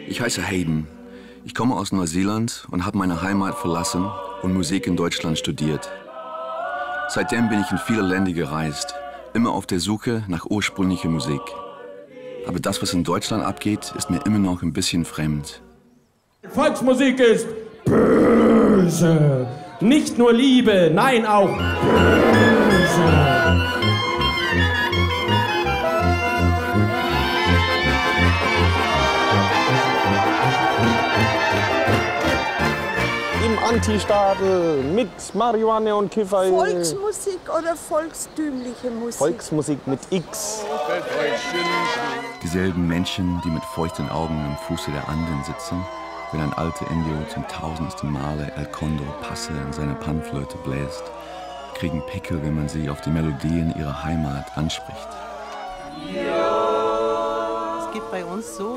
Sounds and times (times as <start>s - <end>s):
Music: 21.1s - 35.1s, 41.3s - 47.3s.